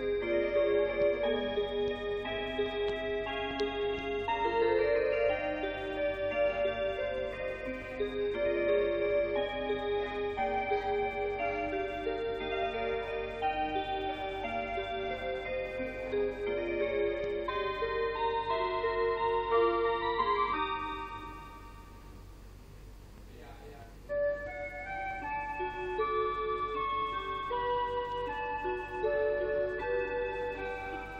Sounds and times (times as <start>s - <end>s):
Music: 0.0s - 22.4s, 23.5s - 31.1s
Speech: 23.3s - 24.0s.